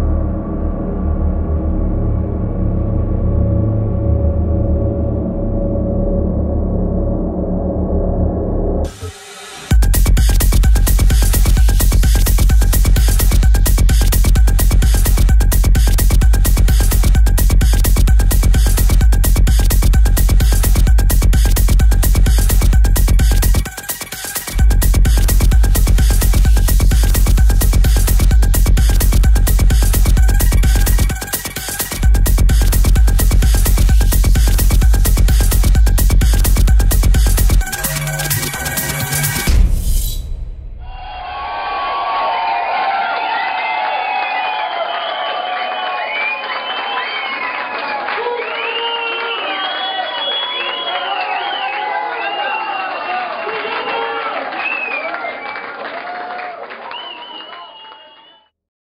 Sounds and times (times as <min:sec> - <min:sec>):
Techno: 0:08.9 - 0:40.4.